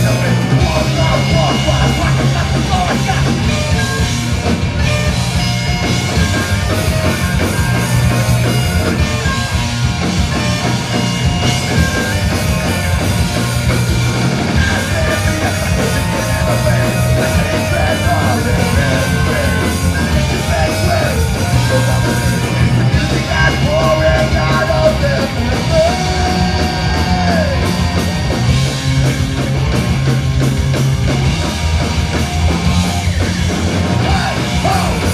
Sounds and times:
Bagpipes: 0.0s - 28.8s.

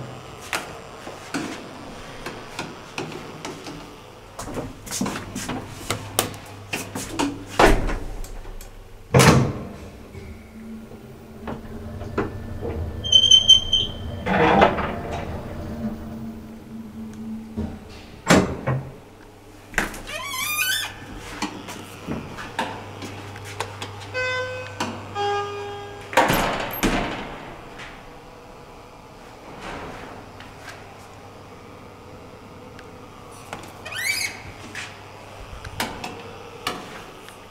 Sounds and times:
Sliding door: 6.8s - 19.1s, 25.6s - 28.2s, 29.2s - 30.8s.

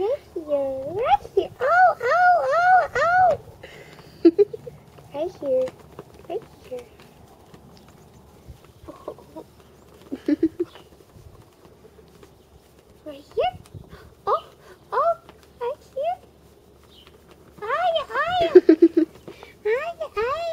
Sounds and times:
Speech: 0.0s - 3.4s, 5.1s - 5.7s, 6.3s - 7.0s, 13.0s - 13.6s, 14.3s - 16.3s, 17.6s - 18.7s, 19.6s - 20.5s.

